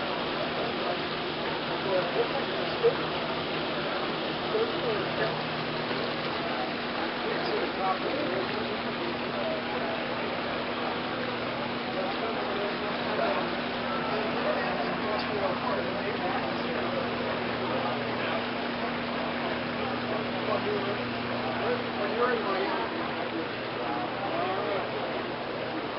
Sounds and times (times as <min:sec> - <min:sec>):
Speech: 0:00.0 - 0:25.9.